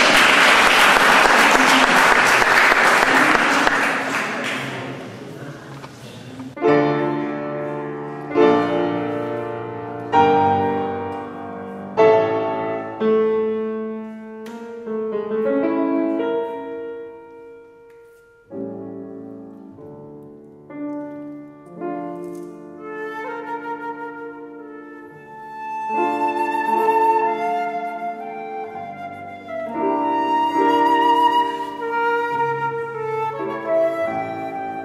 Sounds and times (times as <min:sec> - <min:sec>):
Piano: 0:00.0 - 0:34.8.